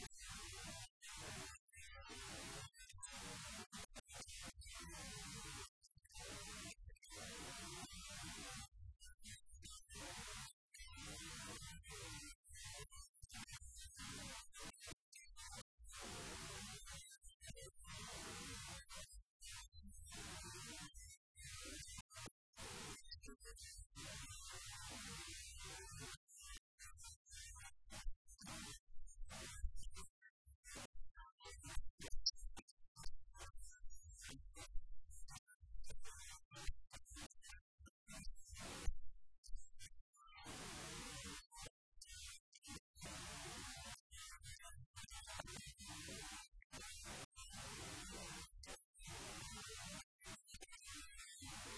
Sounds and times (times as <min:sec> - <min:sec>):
Speech: 0:00.0 - 0:30.2, 0:30.8 - 0:35.3, 0:40.2 - 0:48.8.